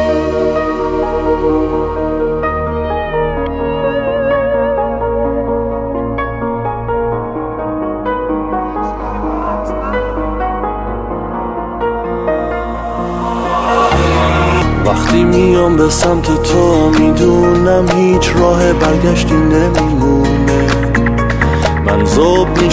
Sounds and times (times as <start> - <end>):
Tender music: 0.0 - 22.7.